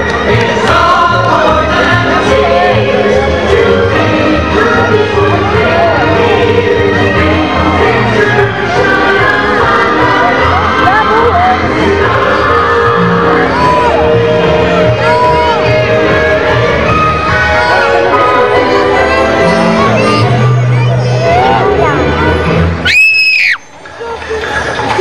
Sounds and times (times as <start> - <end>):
Music: 0.0 - 25.0.